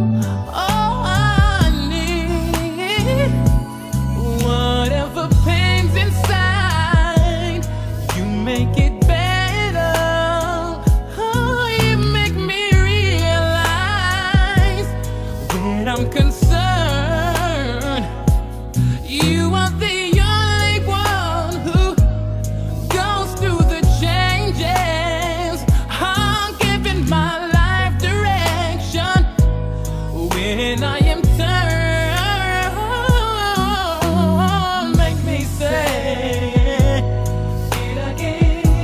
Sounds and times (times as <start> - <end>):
Soul music: 0.0 - 38.8.